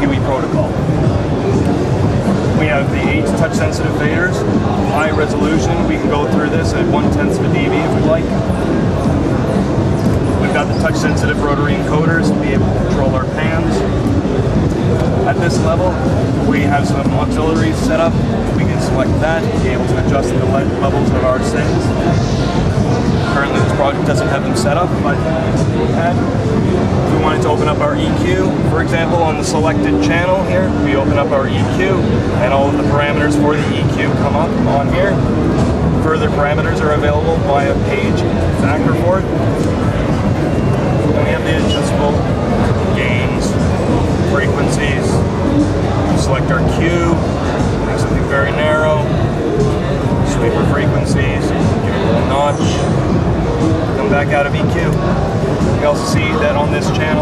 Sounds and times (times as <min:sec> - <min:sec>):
Speech: 0:00.0 - 0:01.8, 0:02.4 - 0:14.2, 0:14.8 - 0:57.2
Music: 0:00.0 - 0:57.2.